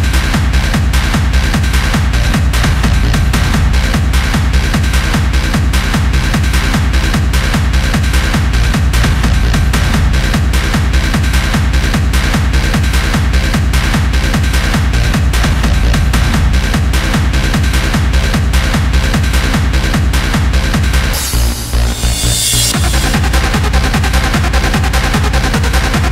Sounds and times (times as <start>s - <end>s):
Techno: 0.0s - 26.1s.